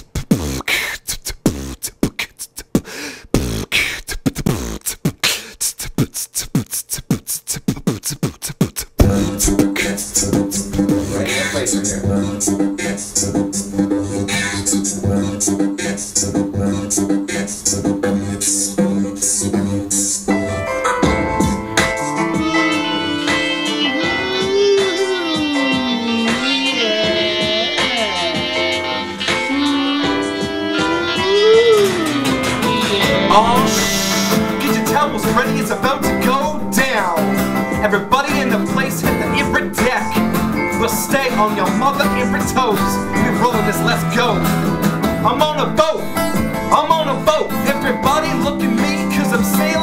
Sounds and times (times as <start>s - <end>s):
Music: 0.0s - 49.8s.